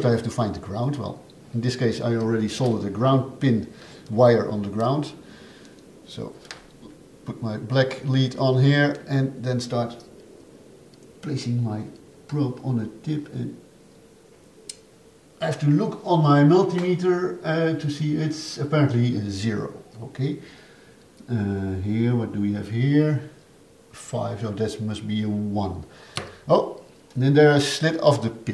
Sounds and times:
Speech: 0.0 - 5.2, 6.1 - 6.4, 7.2 - 10.1, 11.2 - 13.6, 15.4 - 20.4, 21.2 - 23.4, 24.0 - 25.9, 26.5 - 28.5.

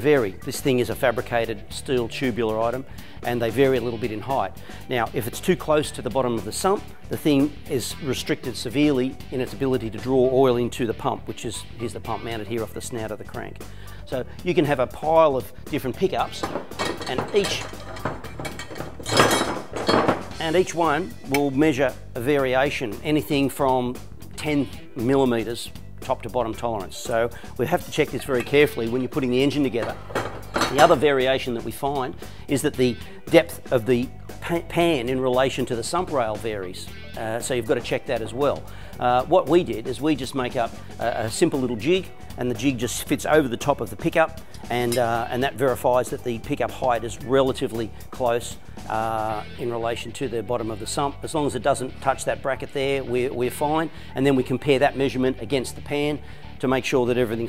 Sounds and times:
Speech: 0.0 - 16.4, 17.0 - 17.8, 20.4 - 30.0, 30.6 - 57.4
Music: 0.0 - 57.4.

